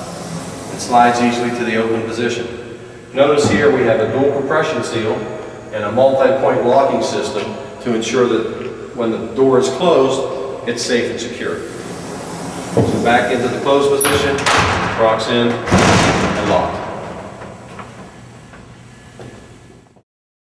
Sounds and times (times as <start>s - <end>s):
Speech: 0.7s - 11.6s, 12.8s - 16.9s
Sliding door: 11.6s - 19.5s.